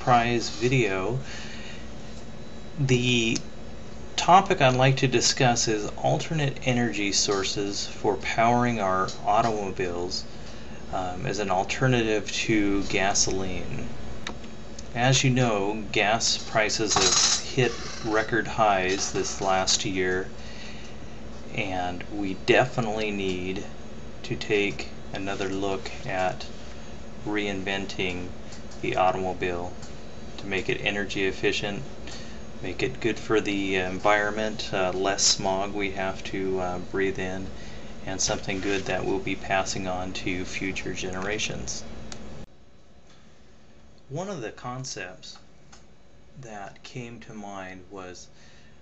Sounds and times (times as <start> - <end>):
Speech: 0.0 - 1.3, 2.8 - 3.5, 4.2 - 10.3, 10.9 - 13.9, 14.8 - 20.4, 21.5 - 26.5, 27.2 - 29.8, 30.4 - 31.9, 32.6 - 41.9, 44.1 - 45.5, 46.4 - 48.4.